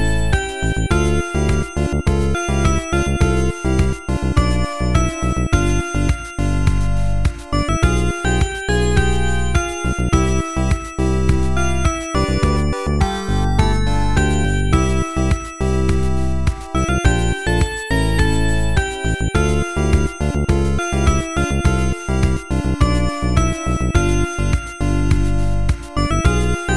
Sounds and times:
Soundtrack music: 0.0s - 26.7s.

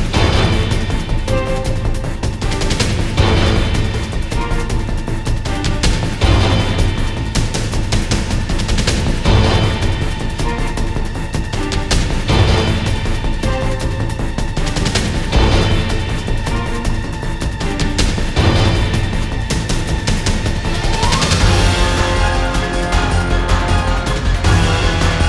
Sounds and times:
Music: 0.0s - 25.2s.

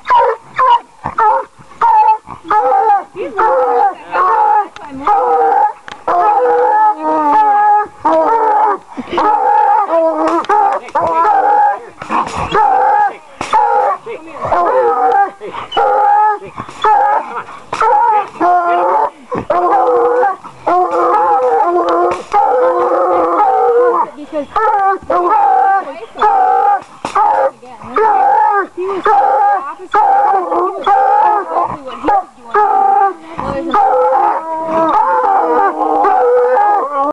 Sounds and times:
Speech: 10.2s - 17.4s, 21.9s - 34.4s.

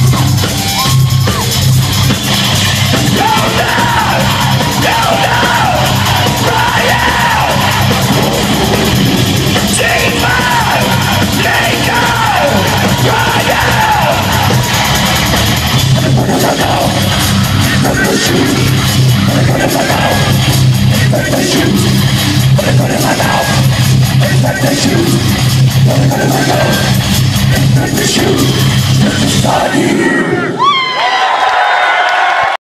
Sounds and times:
Rock music: 0.0s - 30.7s
Singing: 3.1s - 8.6s, 9.6s - 14.9s, 16.0s - 30.6s.

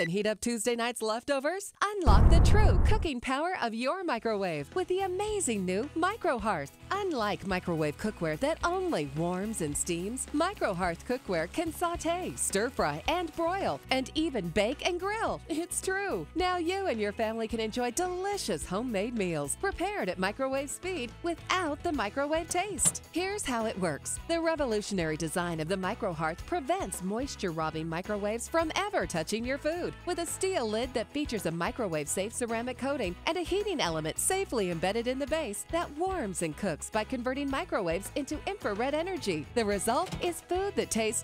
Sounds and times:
Speech: 0.0s - 41.2s
Music: 2.0s - 41.2s.

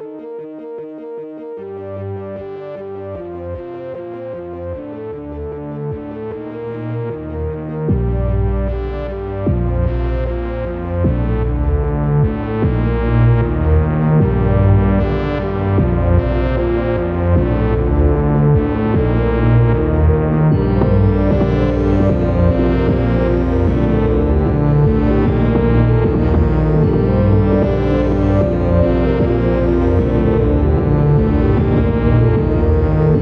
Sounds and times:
Techno: 4.7s - 33.2s.

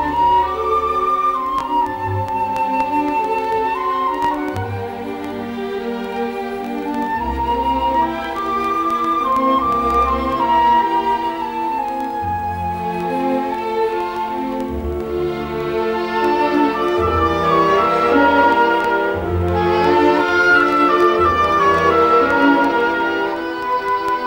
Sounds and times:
Classical music: 0.0s - 24.2s
Orchestra: 0.0s - 24.2s.

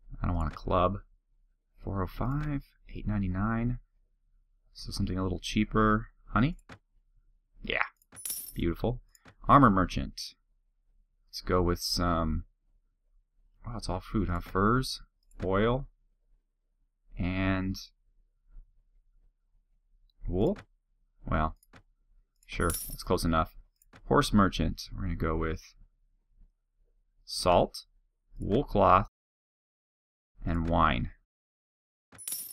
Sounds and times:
Speech: 0.1s - 1.1s, 1.8s - 3.8s, 4.8s - 6.6s, 7.6s - 7.9s, 8.6s - 10.4s, 11.3s - 12.5s, 13.6s - 15.9s, 17.2s - 18.0s, 20.2s - 20.6s, 21.2s - 21.6s, 22.5s - 25.8s, 27.3s - 29.1s, 30.4s - 31.2s.

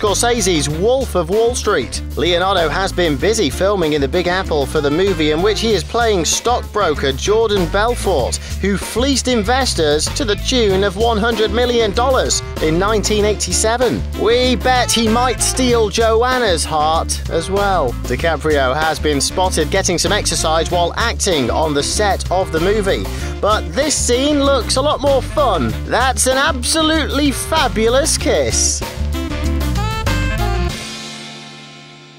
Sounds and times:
Speech: 0.0s - 28.9s
Music: 0.0s - 32.1s.

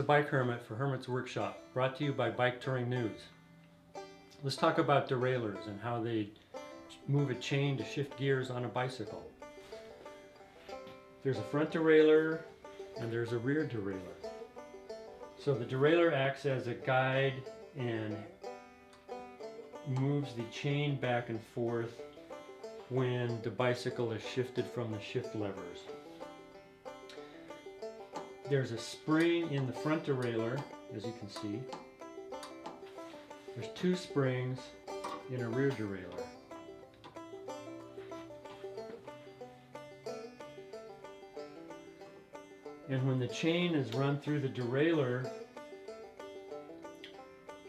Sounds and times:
Speech: 0.0s - 3.3s, 4.4s - 6.3s, 6.9s - 9.3s, 11.2s - 14.2s, 15.4s - 18.3s, 19.9s - 22.0s, 22.9s - 25.9s, 28.5s - 31.7s, 33.6s - 36.3s, 42.9s - 45.3s
Music: 0.0s - 47.6s.

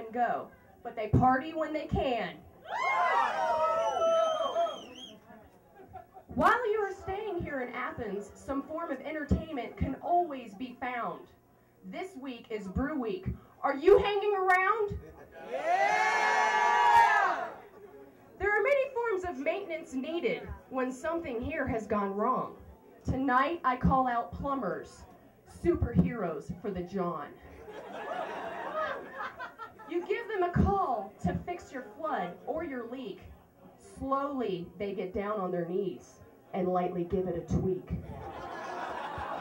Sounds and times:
Speech: 0.0s - 2.4s, 6.4s - 15.4s, 18.4s - 27.4s, 29.9s - 38.0s.

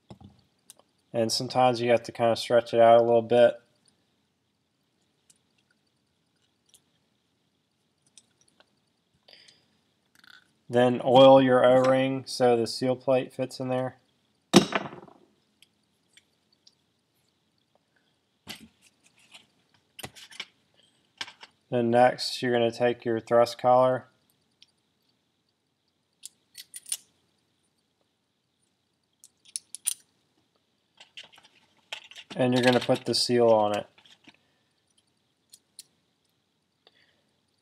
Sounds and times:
Inside, small room: 0.0s - 37.6s
Speech: 1.2s - 3.6s, 10.7s - 14.0s, 21.7s - 24.1s, 32.4s - 33.9s.

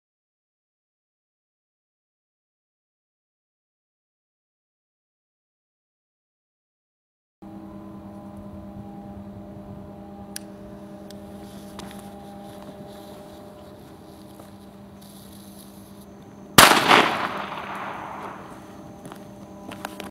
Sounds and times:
Firecracker: 15.0s - 18.8s.

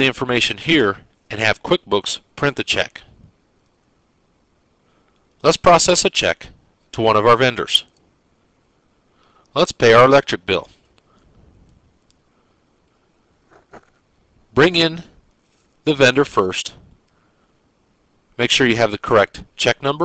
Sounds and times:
Speech: 0.0s - 3.1s, 5.4s - 7.9s, 9.5s - 10.8s, 14.6s - 15.1s, 15.8s - 16.8s, 18.4s - 20.0s.

